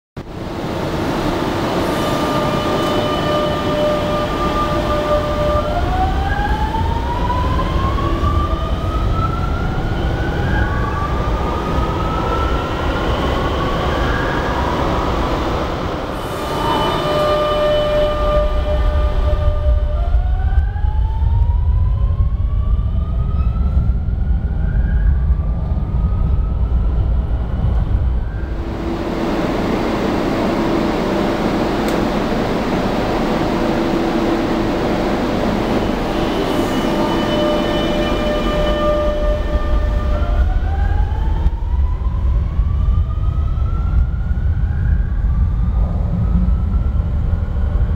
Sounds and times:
Subway, metro, underground: 0.1s - 47.9s
Train: 0.2s - 47.9s.

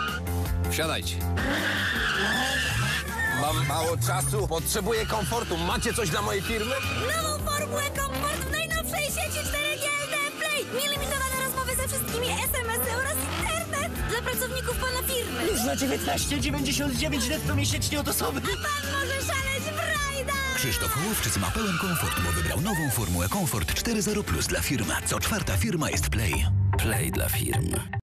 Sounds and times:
Music: 0.0s - 28.0s
Speech: 3.4s - 28.0s.

